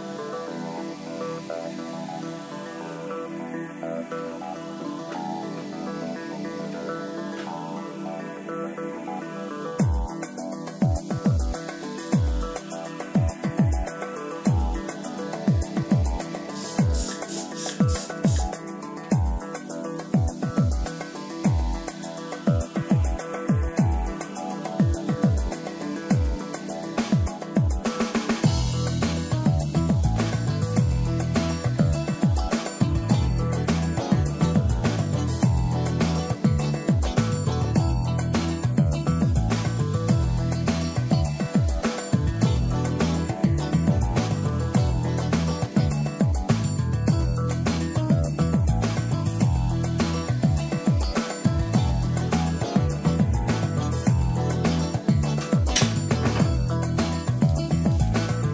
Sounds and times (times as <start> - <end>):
Music: 0.0 - 58.5.